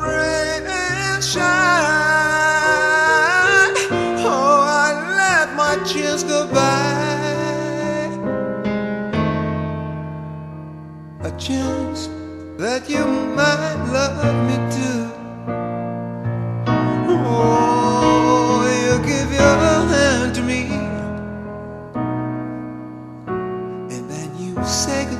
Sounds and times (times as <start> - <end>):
Piano: 0.0 - 25.1.